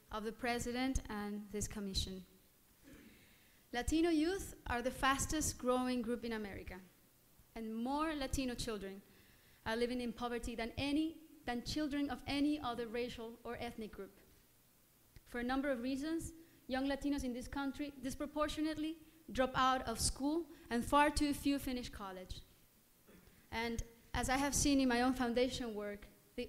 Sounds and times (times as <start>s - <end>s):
Female speech, woman speaking: 0.0s - 2.3s, 3.8s - 6.9s, 7.6s - 9.0s, 9.7s - 14.2s, 15.3s - 22.4s, 23.5s - 26.4s
Narration, monologue: 0.0s - 26.4s.